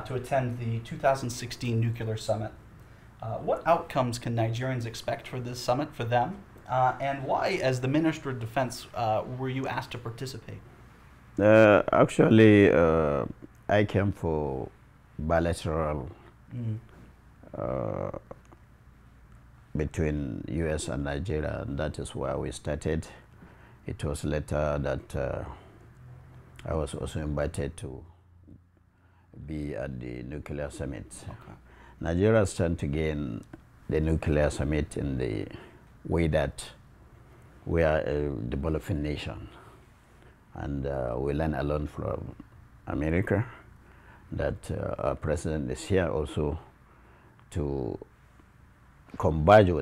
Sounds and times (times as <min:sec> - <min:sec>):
Speech: 0:00.0 - 0:02.6, 0:03.2 - 0:10.6, 0:11.4 - 0:18.4, 0:19.7 - 0:23.3, 0:23.9 - 0:25.6, 0:26.6 - 0:28.2, 0:29.4 - 0:36.8, 0:37.7 - 0:39.6, 0:40.6 - 0:43.6, 0:44.3 - 0:46.7, 0:47.5 - 0:48.1, 0:49.1 - 0:49.8
Inside, small room: 0:00.0 - 0:49.8.